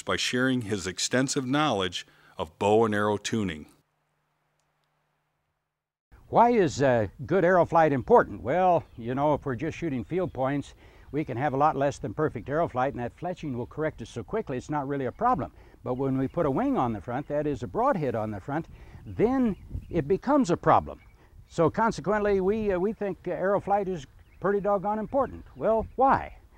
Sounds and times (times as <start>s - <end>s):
Speech: 0.0s - 3.8s, 6.3s - 26.4s.